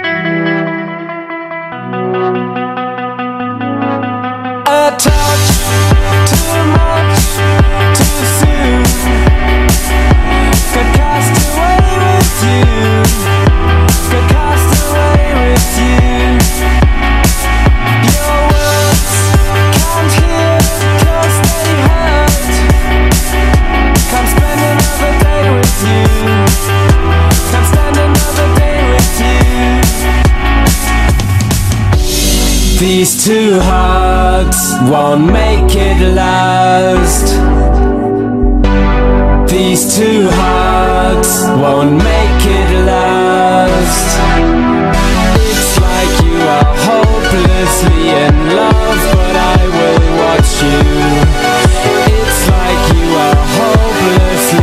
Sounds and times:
Dubstep: 0:04.7 - 0:54.6.

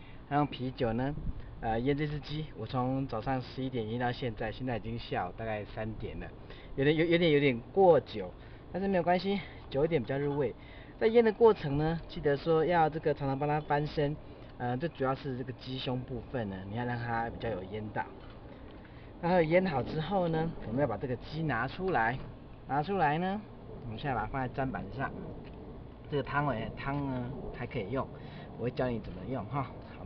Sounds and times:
Speech: 0:00.3 - 0:18.2, 0:19.2 - 0:25.2, 0:26.1 - 0:30.0.

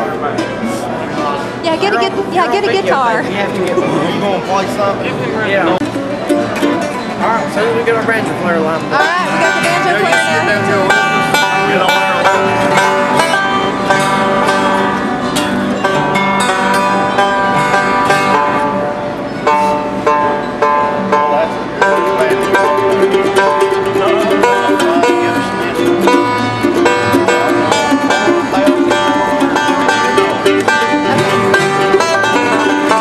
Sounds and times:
Bluegrass: 0:00.0 - 0:33.0.

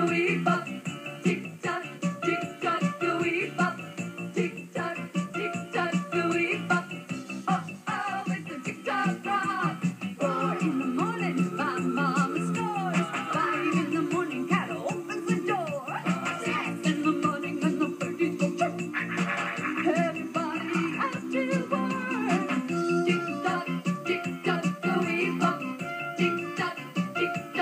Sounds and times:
Music: 0:00.0 - 0:27.6.

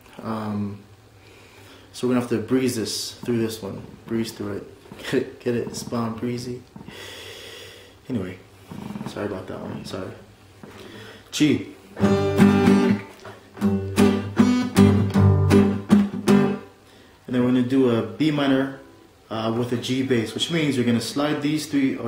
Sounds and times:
Speech: 0:00.2 - 0:00.9, 0:01.9 - 0:06.7, 0:08.0 - 0:08.5, 0:09.1 - 0:10.3, 0:11.3 - 0:11.8, 0:17.3 - 0:22.0
Acoustic guitar: 0:11.8 - 0:16.8
Strum: 0:12.0 - 0:16.7.

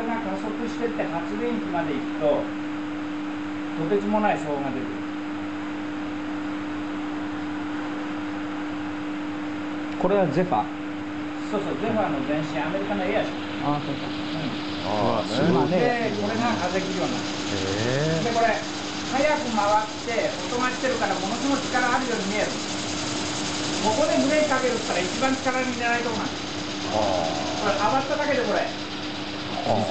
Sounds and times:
Speech: 0:00.0 - 0:02.5, 0:03.8 - 0:05.0, 0:10.0 - 0:10.7, 0:11.4 - 0:22.6, 0:23.8 - 0:28.8.

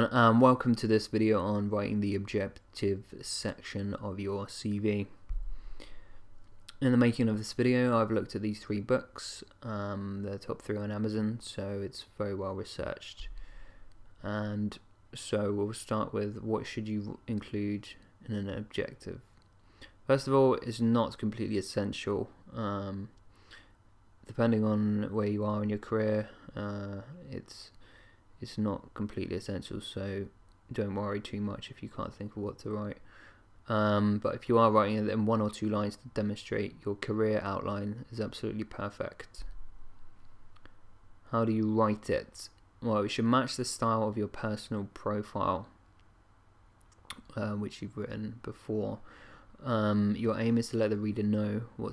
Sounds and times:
Speech: 0:00.0 - 0:05.2, 0:06.7 - 0:13.4, 0:14.2 - 0:19.3, 0:20.1 - 0:23.2, 0:24.3 - 0:27.8, 0:28.4 - 0:33.0, 0:33.7 - 0:39.5, 0:41.3 - 0:45.8, 0:47.1 - 0:49.0, 0:49.6 - 0:51.9.

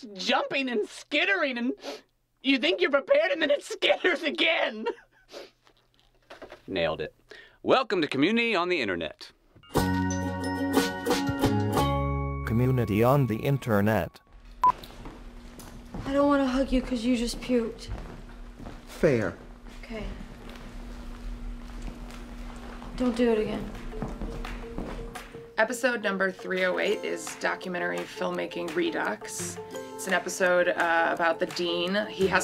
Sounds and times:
Female speech, woman speaking: 0:00.0 - 0:01.8, 0:02.4 - 0:04.9, 0:16.0 - 0:17.9, 0:19.8 - 0:20.2, 0:23.0 - 0:23.8, 0:25.6 - 0:32.4
Music: 0:09.6 - 0:14.2, 0:23.0 - 0:32.4.

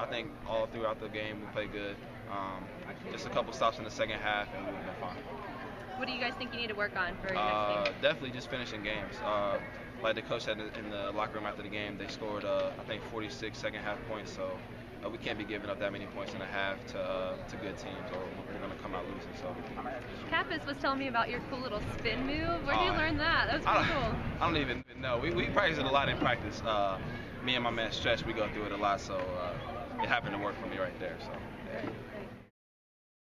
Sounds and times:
Male speech, man speaking: 0:00.0 - 0:05.4, 0:07.3 - 0:20.1, 0:22.7 - 0:32.0.

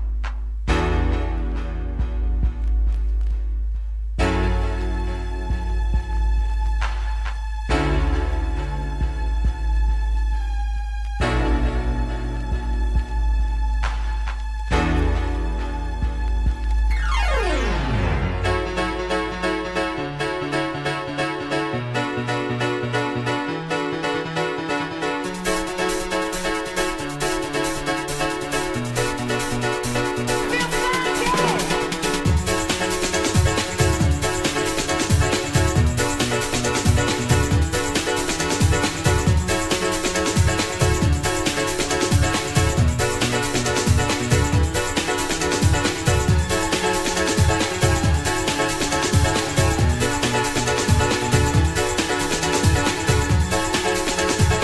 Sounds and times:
Music: 0:00.0 - 0:54.6.

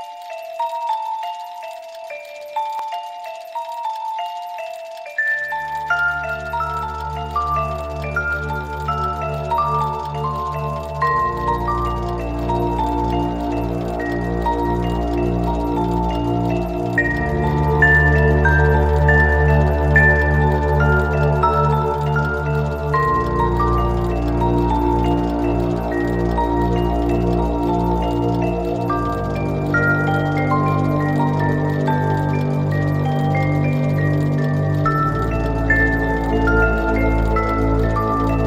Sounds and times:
Music: 0:00.0 - 0:38.4.

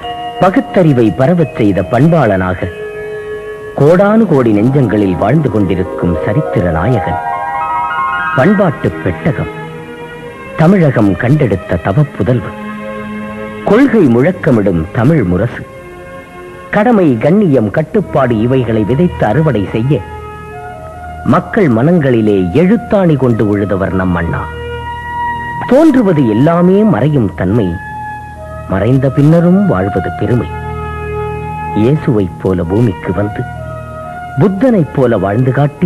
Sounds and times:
Music: 0:00.0 - 0:35.8
Male speech, man speaking: 0:00.4 - 0:02.7, 0:03.8 - 0:07.2, 0:08.4 - 0:09.5, 0:10.6 - 0:12.5, 0:13.7 - 0:15.7, 0:16.8 - 0:20.0, 0:21.3 - 0:24.5, 0:25.6 - 0:27.8, 0:28.7 - 0:30.5, 0:31.8 - 0:33.5, 0:34.4 - 0:35.8.

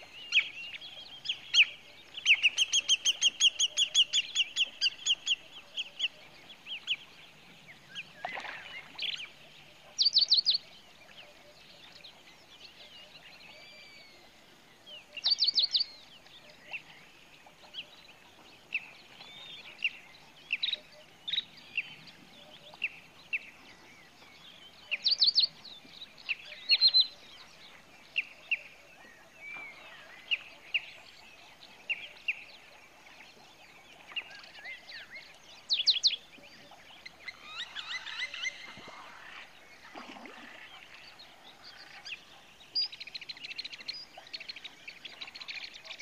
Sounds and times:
Chirp, tweet: 0:00.0 - 0:46.0.

